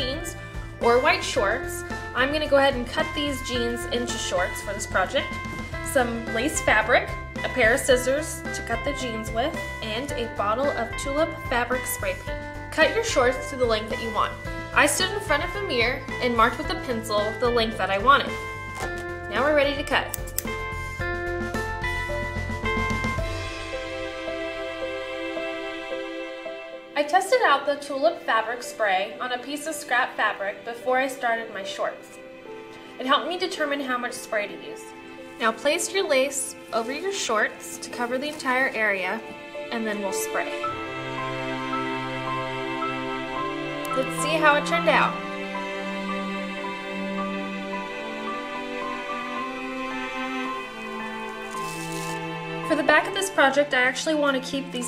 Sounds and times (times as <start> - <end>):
Speech: 0.0 - 5.3, 5.9 - 12.2, 12.8 - 18.4, 19.3 - 20.1, 27.0 - 32.1, 33.0 - 40.6, 52.7 - 54.8
Music: 0.0 - 54.8.